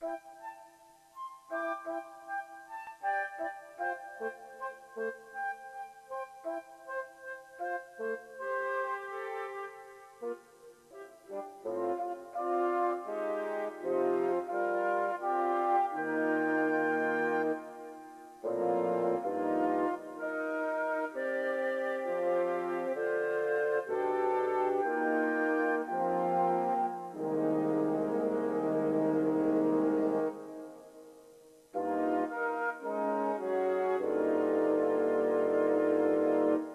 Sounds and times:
Music: 0.0s - 36.7s.

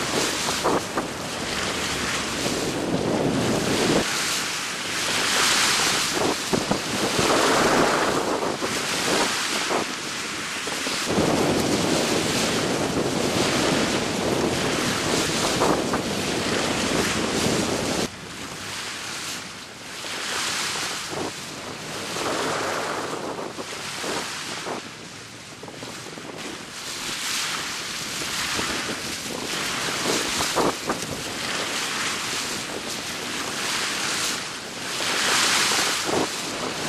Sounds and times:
Sailboat, sailing ship: 0.0s - 36.8s.

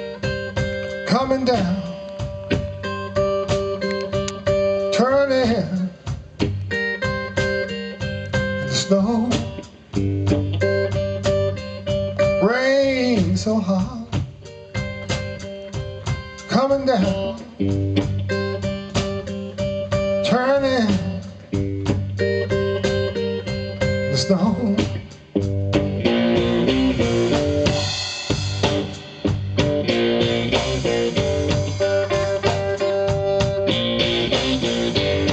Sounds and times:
Music: 0.0s - 35.3s.

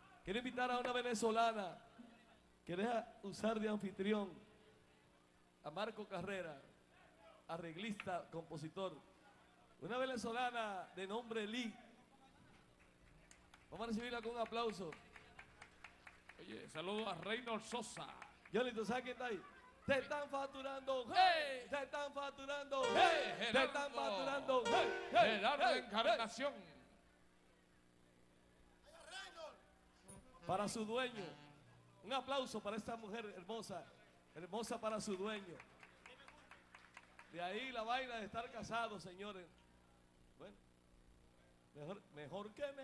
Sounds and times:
Speech: 0.0s - 15.7s, 16.4s - 26.9s, 28.7s - 36.6s, 37.3s - 39.6s, 41.4s - 42.8s
Music: 22.8s - 25.9s.

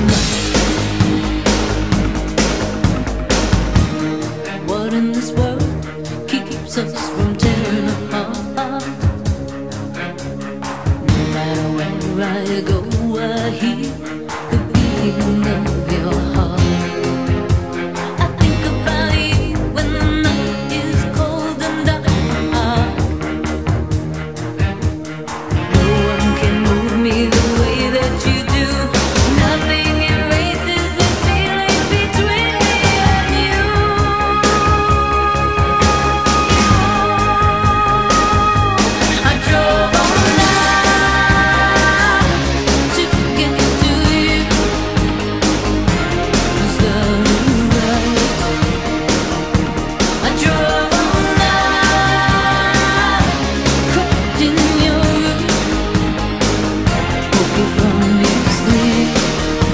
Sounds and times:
Pop music: 0.0s - 59.7s.

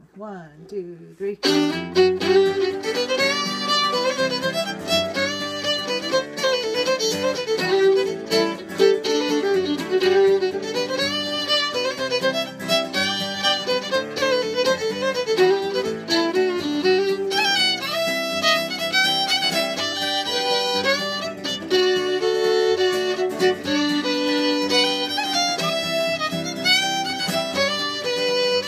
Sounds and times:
Violin, fiddle: 1.4s - 28.6s.

